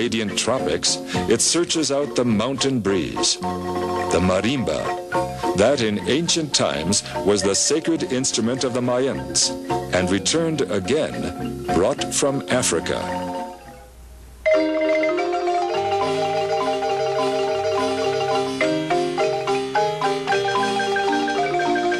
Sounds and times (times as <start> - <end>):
Speech: 0.0 - 3.4, 4.1 - 5.0, 5.6 - 13.2
Music: 0.0 - 21.9.